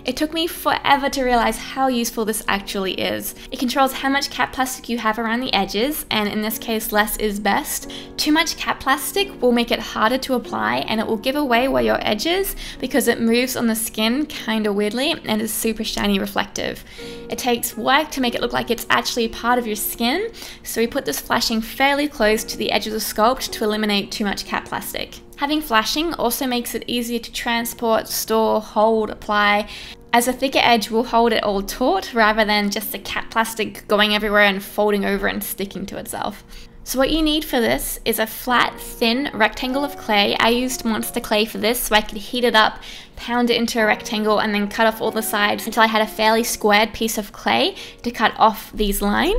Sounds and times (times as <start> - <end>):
Music: 0.0 - 49.3
Speech: 0.0 - 49.3.